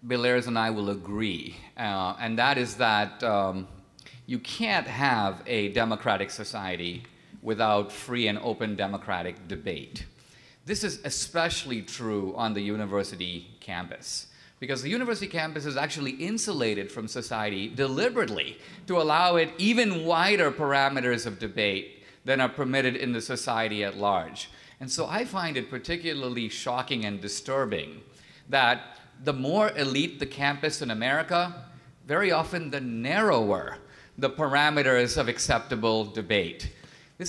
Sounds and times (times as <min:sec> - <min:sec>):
Male speech, man speaking: 0:00.0 - 0:10.1, 0:10.7 - 0:37.2
Narration, monologue: 0:00.0 - 0:37.2.